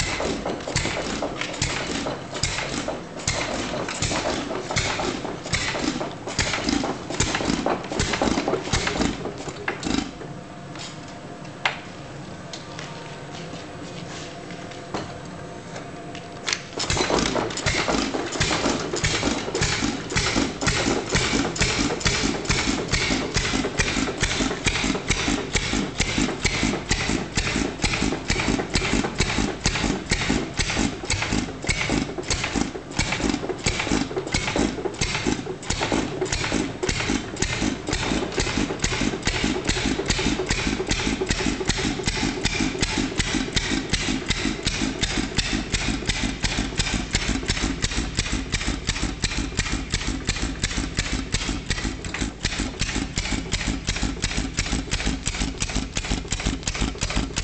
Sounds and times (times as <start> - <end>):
Engine starting: 0.0 - 10.2, 16.5 - 57.4
Idling: 16.9 - 57.4.